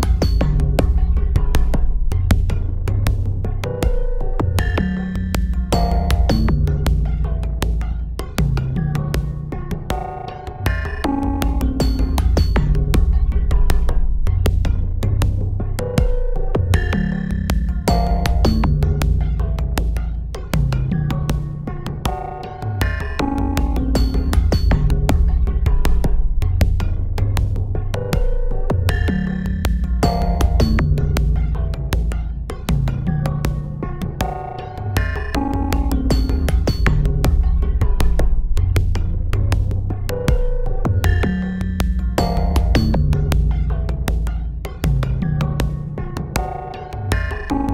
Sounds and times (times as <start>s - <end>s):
Synthesizer: 0.0s - 47.7s.